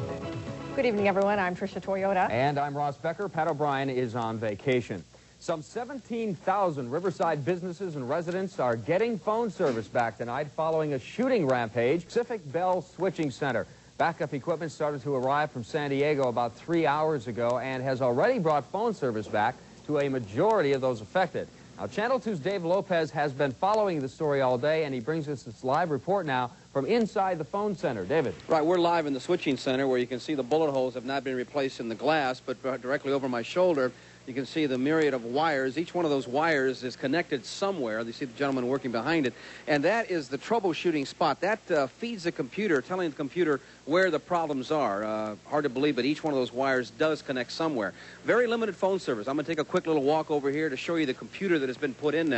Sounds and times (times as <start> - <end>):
Speech: 0.8 - 52.3.